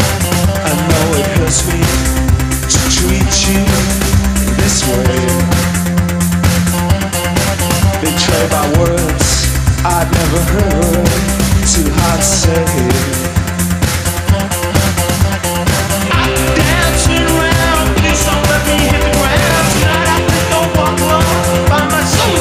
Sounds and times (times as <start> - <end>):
Music: 0.0 - 22.4
Singing: 16.1 - 22.4.